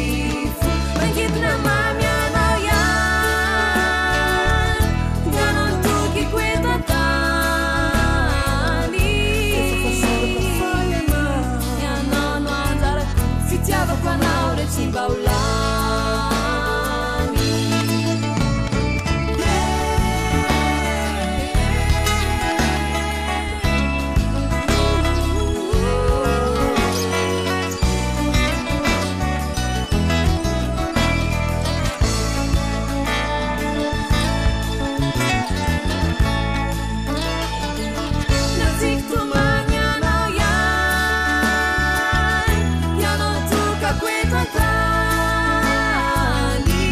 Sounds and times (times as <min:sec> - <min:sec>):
Christmas music: 0:00.0 - 0:46.9.